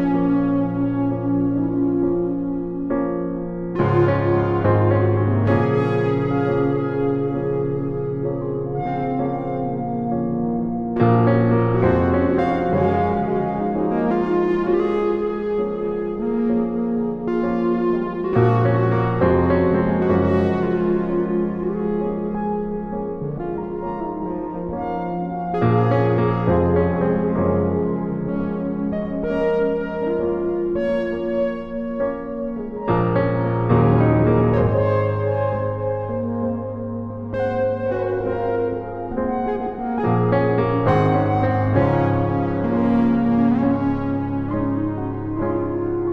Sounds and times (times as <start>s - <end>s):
Music: 0.0s - 46.1s.